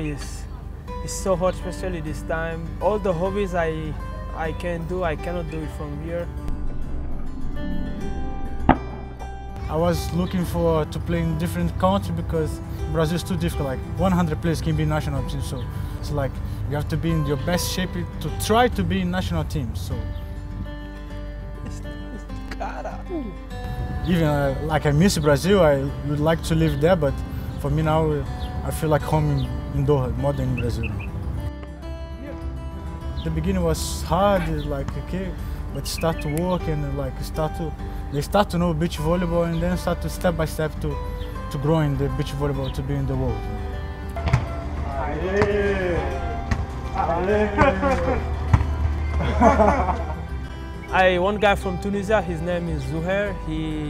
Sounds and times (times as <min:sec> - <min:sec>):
Music: 0:00.0 - 0:53.9
Outside, urban or manmade: 0:00.0 - 0:53.9.